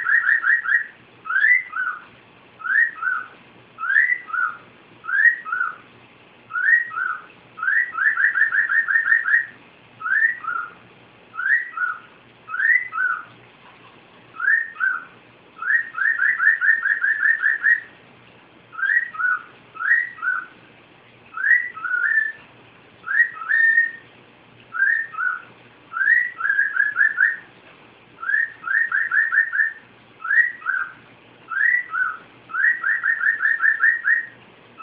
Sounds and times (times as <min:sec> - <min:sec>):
Chirp, tweet: 0:00.0 - 0:05.8, 0:06.5 - 0:10.8, 0:11.4 - 0:13.3, 0:14.4 - 0:17.9, 0:18.8 - 0:20.6, 0:21.3 - 0:22.4, 0:23.0 - 0:24.1, 0:24.7 - 0:27.5, 0:28.2 - 0:34.4.